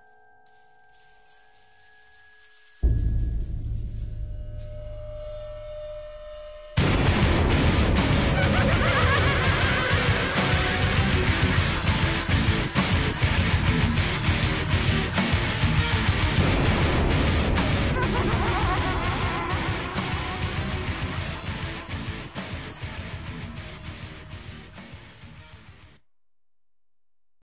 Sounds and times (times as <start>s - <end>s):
Theme music: 2.8s - 25.7s.